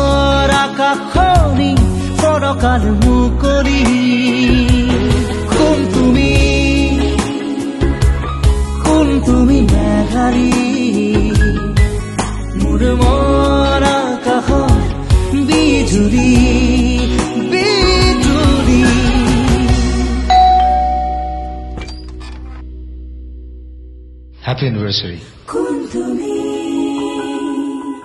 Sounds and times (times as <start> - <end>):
Singing: 0.0 - 8.0, 8.8 - 11.7, 12.6 - 20.1, 25.5 - 28.0
Music: 0.0 - 28.0.